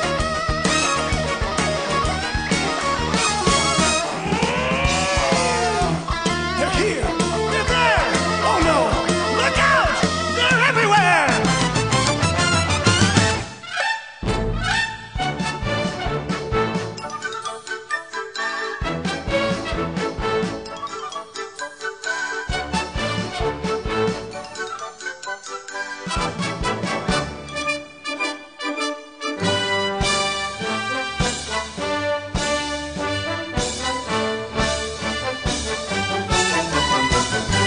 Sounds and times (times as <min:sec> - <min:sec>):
Music: 0:00.0 - 0:37.6.